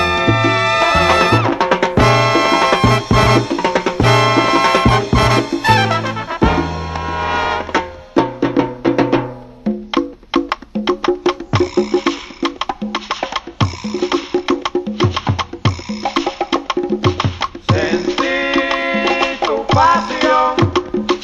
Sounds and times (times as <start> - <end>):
Salsa music: 0.0 - 21.2.